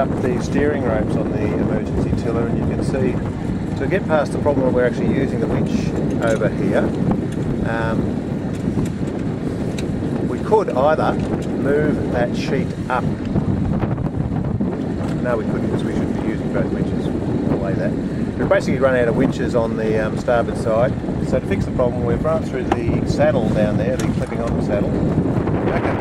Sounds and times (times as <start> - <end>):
Speech: 0.0 - 3.2, 3.8 - 6.9, 7.6 - 8.1, 10.3 - 13.1, 15.1 - 25.0, 25.7 - 26.0
Wind noise (microphone): 0.0 - 26.0.